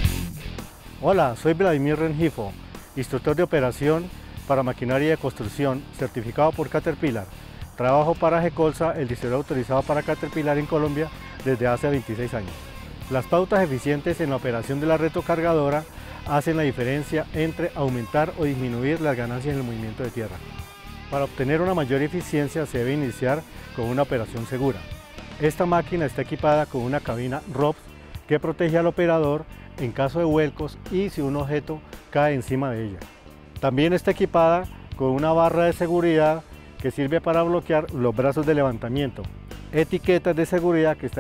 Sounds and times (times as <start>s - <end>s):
Music: 0.0s - 41.2s
Speech: 1.0s - 20.4s, 21.1s - 24.8s, 25.4s - 41.2s.